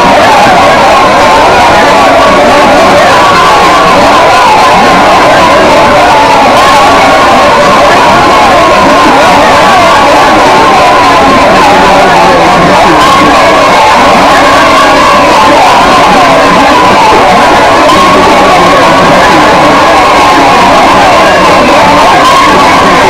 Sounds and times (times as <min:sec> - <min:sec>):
Speech: 0:00.0 - 0:23.0.